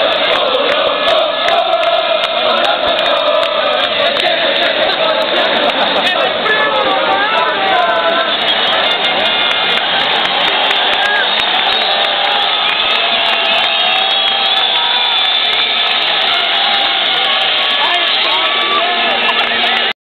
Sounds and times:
Speech: 0:17.1 - 0:19.8.

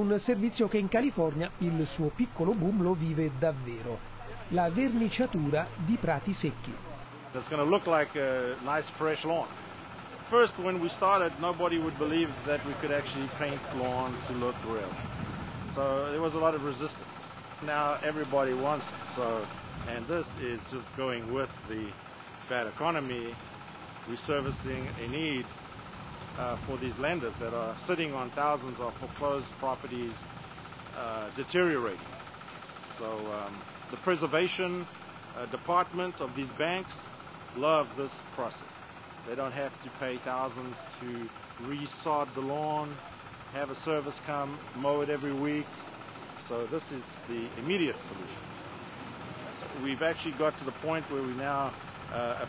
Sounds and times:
Speech: 0:00.0 - 0:09.5, 0:10.2 - 0:15.0, 0:15.7 - 0:23.4, 0:24.1 - 0:25.5, 0:26.4 - 0:30.3, 0:31.0 - 0:32.1, 0:32.9 - 0:45.7, 0:46.4 - 0:48.4, 0:49.6 - 0:52.4.

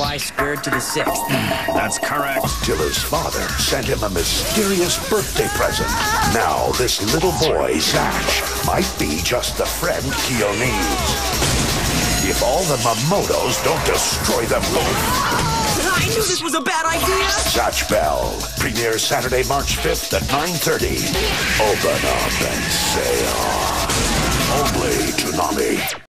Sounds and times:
Speech: 0:00.0 - 0:11.0, 0:15.8 - 0:23.6, 0:24.5 - 0:26.0
Music: 0:00.0 - 0:26.1.

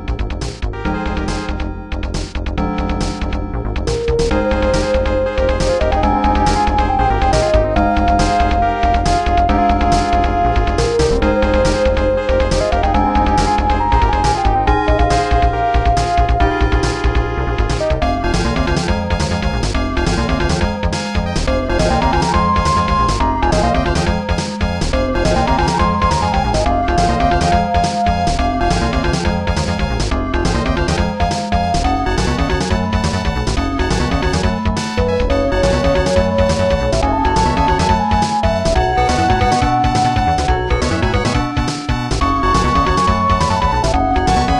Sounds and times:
Theme music: 0:00.0 - 0:44.6.

